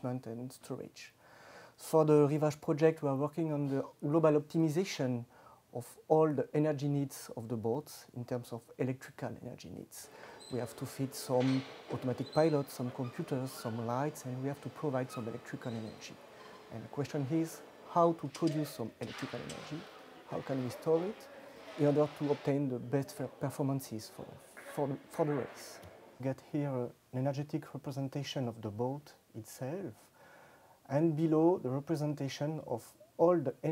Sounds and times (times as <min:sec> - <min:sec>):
Speech: 0:00.0 - 0:01.2, 0:01.8 - 0:30.1, 0:30.9 - 0:33.7.